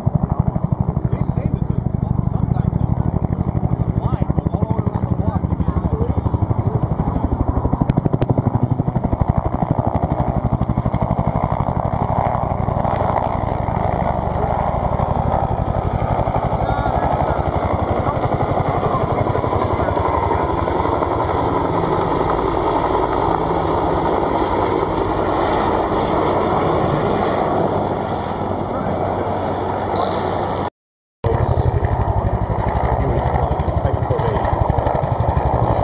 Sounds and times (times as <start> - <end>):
Helicopter: 0.0 - 30.7, 31.3 - 35.8.